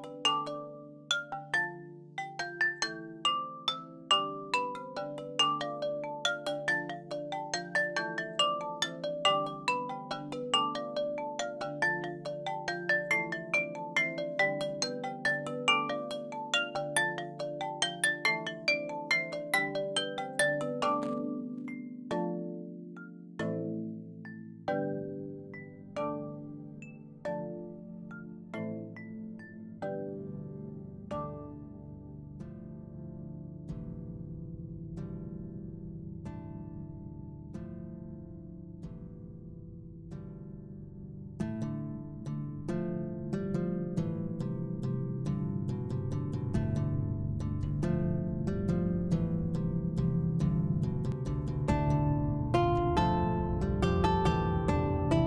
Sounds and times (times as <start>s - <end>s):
Music: 0.0s - 55.2s.